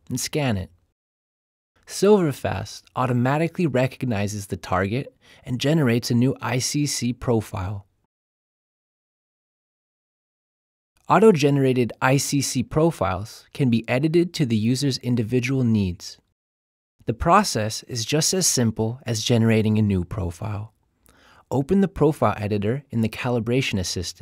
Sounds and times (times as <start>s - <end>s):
Speech: 0.0s - 0.8s, 1.9s - 7.9s, 11.0s - 16.3s, 17.1s - 20.7s, 21.5s - 24.2s.